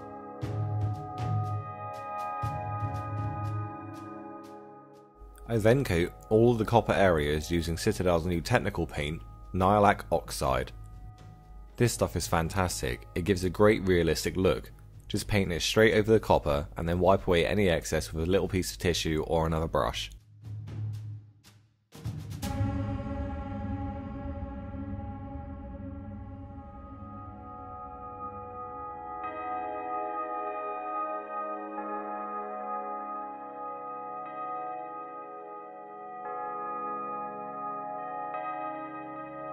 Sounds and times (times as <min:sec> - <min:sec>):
Ambient music: 0:00.0 - 0:39.5.